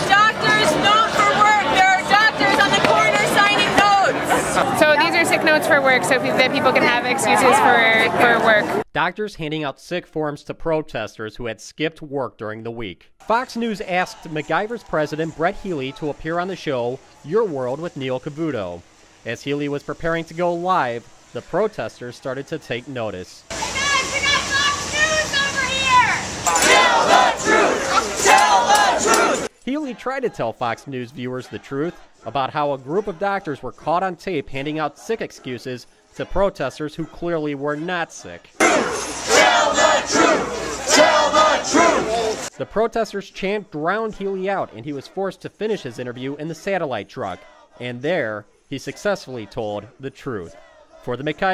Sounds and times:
Speech: 0:00.0 - 0:26.2, 0:29.7 - 0:38.6, 0:42.1 - 0:51.5.

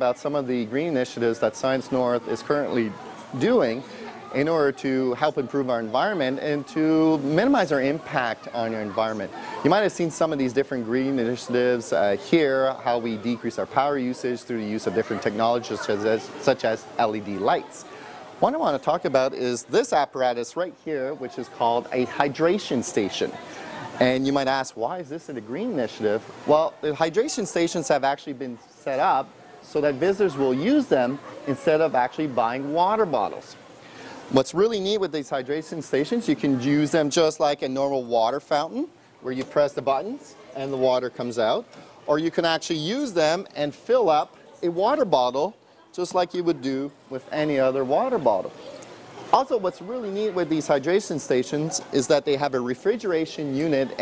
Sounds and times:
Speech: 0:00.0 - 0:33.6, 0:34.3 - 0:48.6, 0:49.3 - 0:54.0.

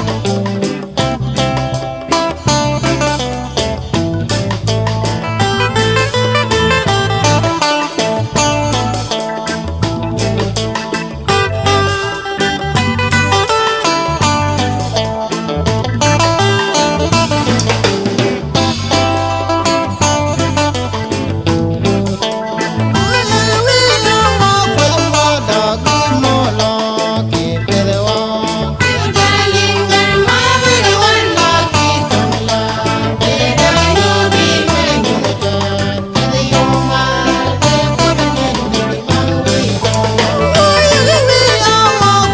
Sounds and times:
Independent music: 0:00.0 - 0:42.3.

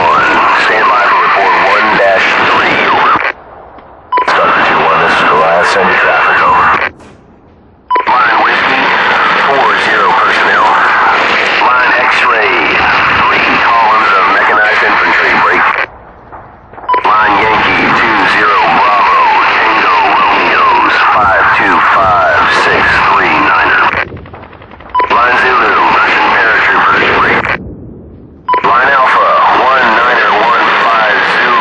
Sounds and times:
Speech: 0:00.0 - 0:03.3, 0:04.2 - 0:06.9, 0:08.0 - 0:15.9, 0:16.9 - 0:24.0, 0:25.0 - 0:27.6, 0:28.5 - 0:31.6.

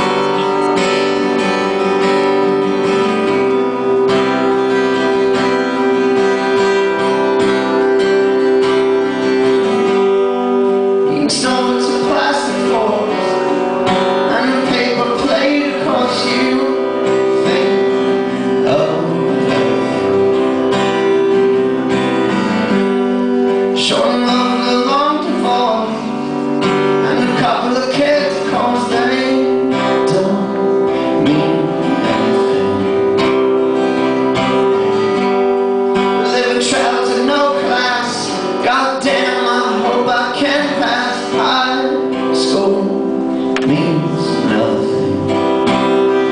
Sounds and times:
Music: 0:00.0 - 0:46.3.

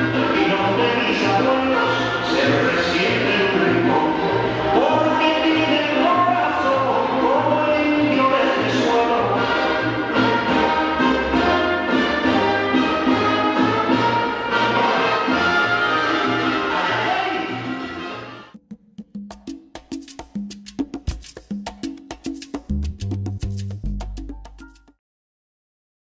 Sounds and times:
Music: 0:00.0 - 0:25.0.

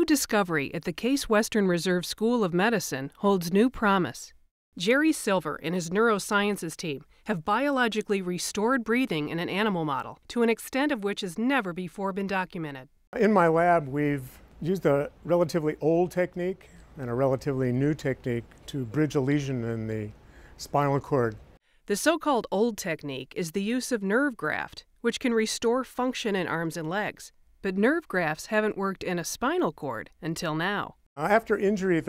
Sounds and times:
Speech: 0:00.0 - 0:32.0.

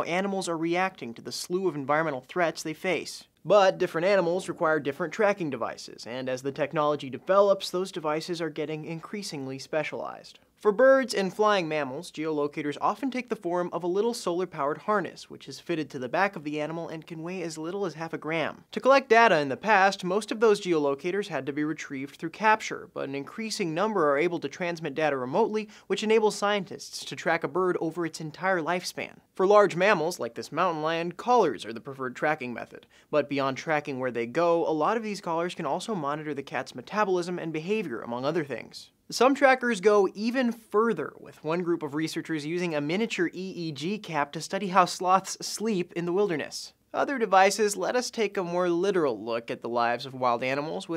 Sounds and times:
Speech: 0:00.0 - 0:50.9.

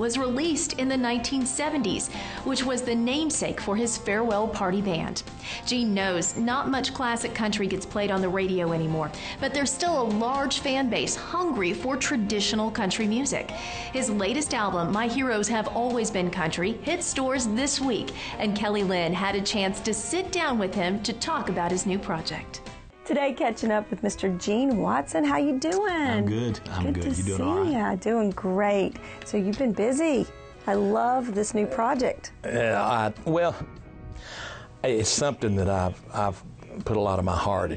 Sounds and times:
Music: 0:00.0 - 0:37.7
Speech: 0:23.1 - 0:33.6, 0:34.9 - 0:37.7.

